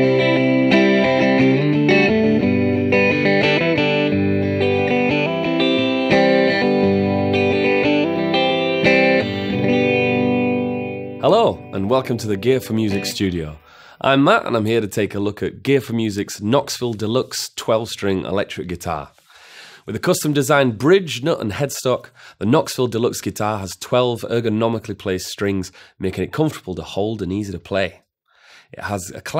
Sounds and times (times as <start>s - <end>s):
Electric guitar: 0.0s - 13.4s
Strum: 0.0s - 13.6s.